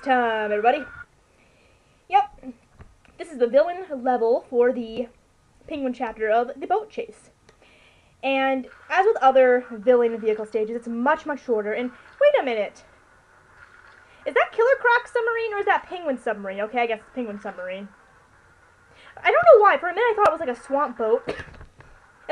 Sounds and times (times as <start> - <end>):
Speech: 0.0 - 0.9, 2.1 - 2.6, 3.2 - 7.3, 8.2 - 12.9, 14.3 - 18.0, 19.2 - 21.4.